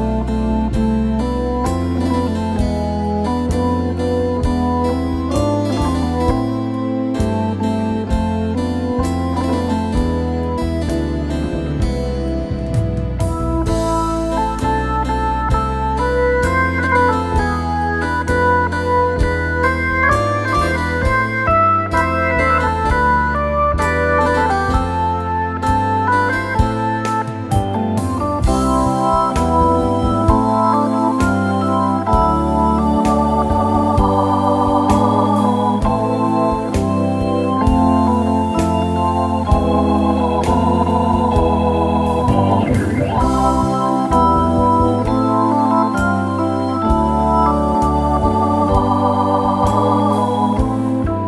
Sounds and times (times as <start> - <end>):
Hammond organ: 0.0 - 51.2.